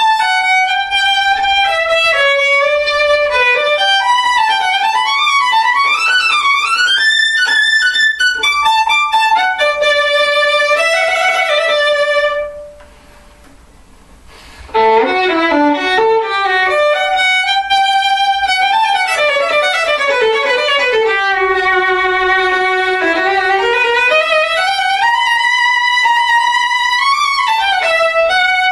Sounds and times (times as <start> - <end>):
Violin, fiddle: 0.0 - 12.8, 14.6 - 28.7.